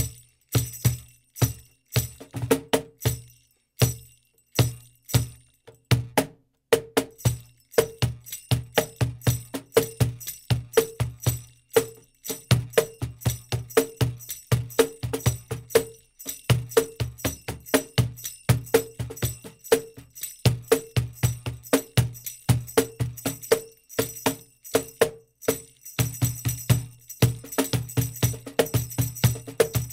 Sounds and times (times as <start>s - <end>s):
Tambourine: 0.0s - 29.9s.